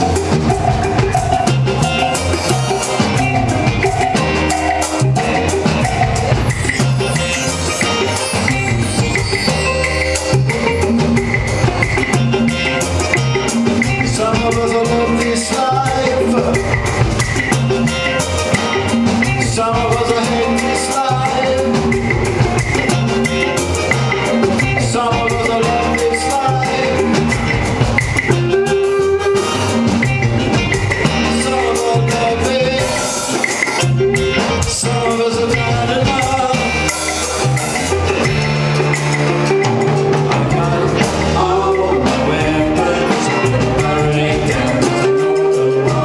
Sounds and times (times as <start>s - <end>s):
Music of Latin America: 0.0s - 46.0s.